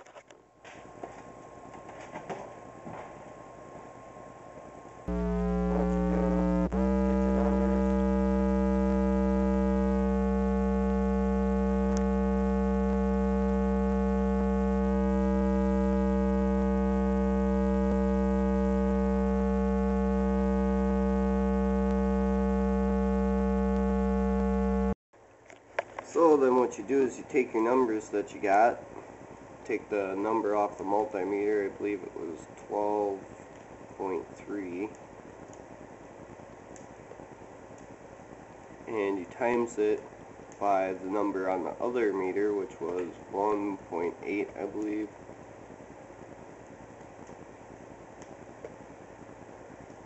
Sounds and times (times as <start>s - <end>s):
Mains hum: 0.0s - 50.0s
Hum: 0.1s - 26.2s, 28.8s - 50.0s.